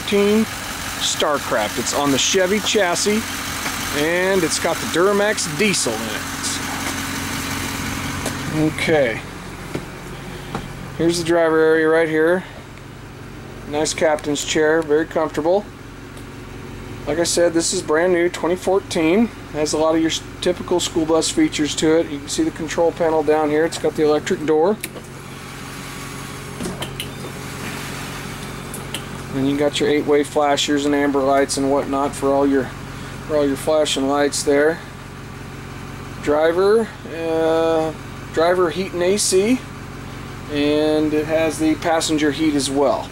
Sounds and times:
Speech: 0.0s - 3.3s, 3.9s - 6.8s, 8.4s - 9.3s, 11.0s - 12.6s, 13.6s - 15.7s, 17.1s - 24.8s, 29.3s - 34.9s, 36.2s - 39.7s, 40.5s - 43.1s.

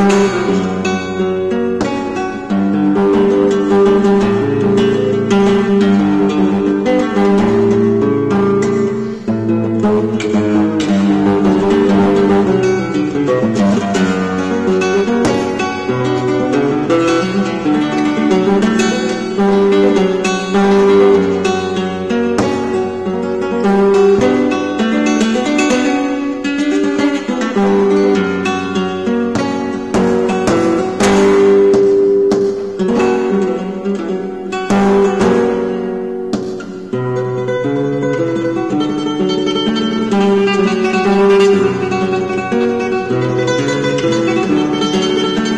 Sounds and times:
Acoustic guitar: 0.0s - 45.5s
Flamenco: 0.0s - 45.5s
Strum: 0.0s - 45.5s.

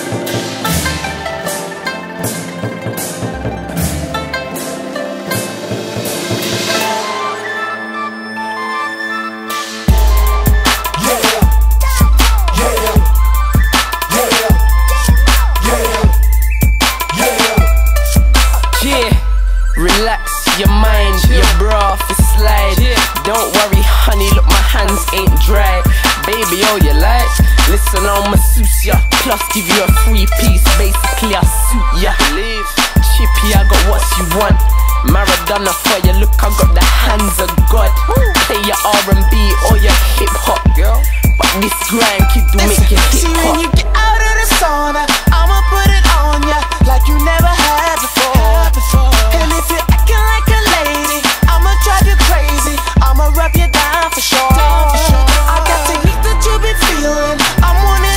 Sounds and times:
Music: 0.0s - 58.1s.

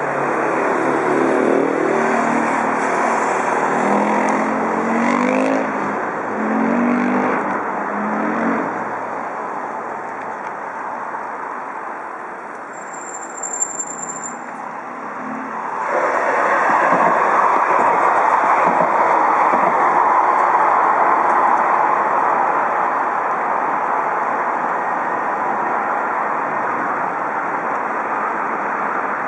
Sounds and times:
Vehicle: 0.0s - 29.2s.

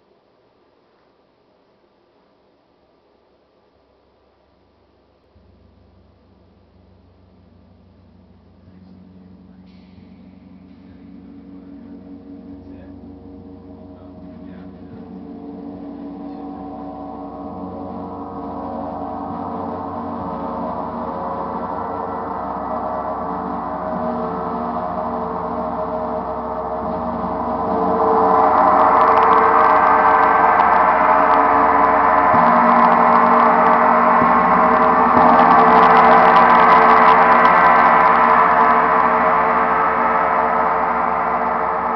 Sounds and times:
Gong: 5.1s - 41.9s.

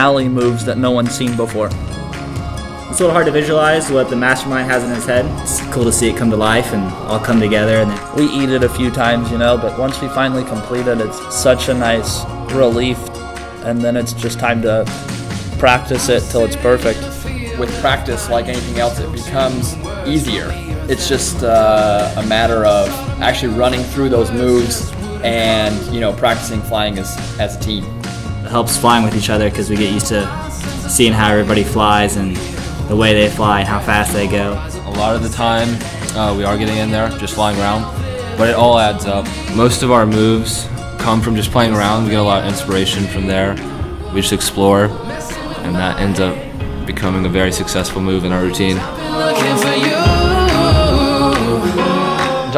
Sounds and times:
Speech: 0.0s - 1.8s, 2.9s - 15.0s, 15.6s - 48.9s
Music: 0.0s - 52.5s.

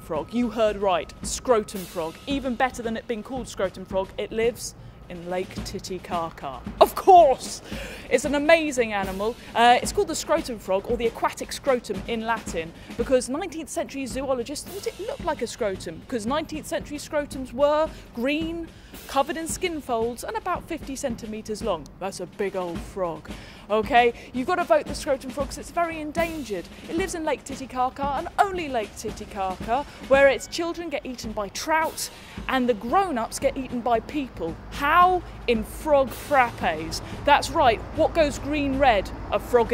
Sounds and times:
Music: 0.0s - 39.7s
Speech: 0.0s - 39.7s.

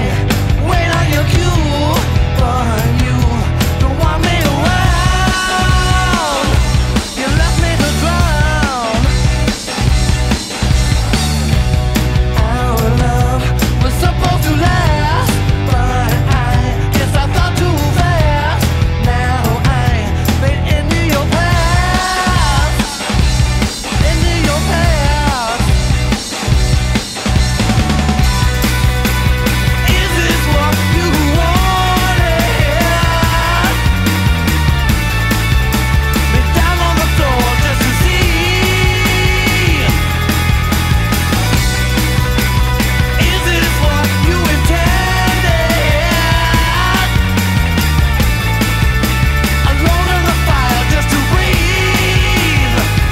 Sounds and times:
Dance music: 0.0s - 53.1s
Funk: 0.0s - 53.1s
Pop music: 0.0s - 53.1s.

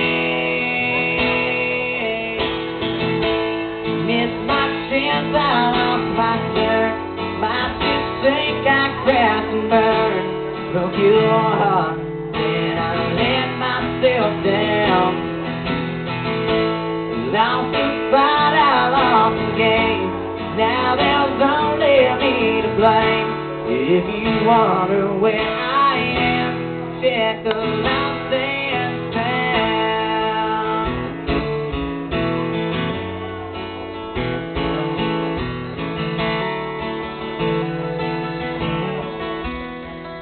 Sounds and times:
Male singing: 0.0s - 2.7s, 4.0s - 15.2s, 17.2s - 31.1s
Music: 0.0s - 40.2s.

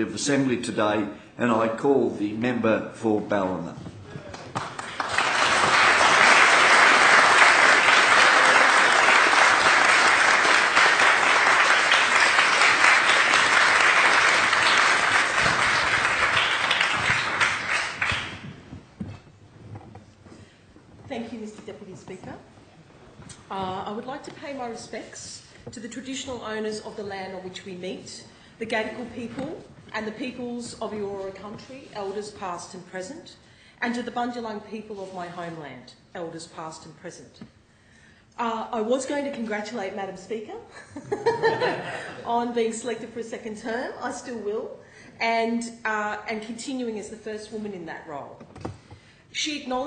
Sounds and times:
Narration, monologue: 0.0s - 4.3s, 19.0s - 40.8s, 41.4s - 49.8s
Female speech, woman speaking: 21.1s - 22.5s, 23.5s - 37.4s, 38.4s - 40.7s, 42.2s - 48.4s, 49.4s - 49.8s.

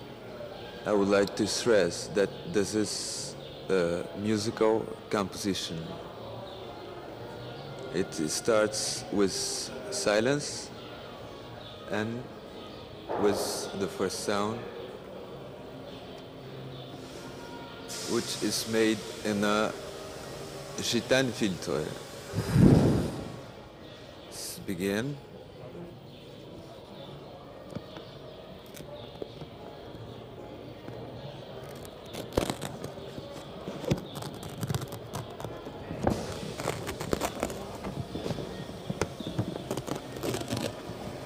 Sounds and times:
Speech: 0.8s - 7.2s, 7.8s - 10.8s, 11.8s - 12.4s, 13.1s - 14.9s, 18.0s - 19.8s, 20.8s - 22.0s, 24.3s - 26.0s.

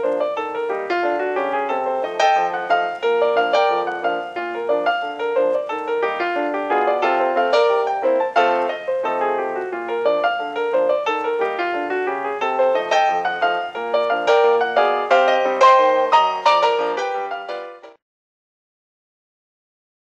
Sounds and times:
Piano: 0.0s - 18.0s.

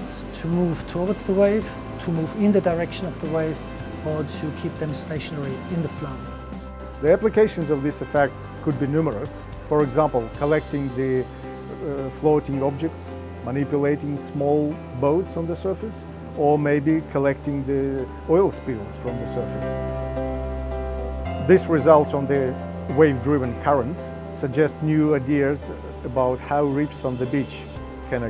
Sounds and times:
Speech: 0.0s - 6.2s, 7.0s - 19.8s, 21.4s - 28.2s
Music: 0.0s - 28.2s.

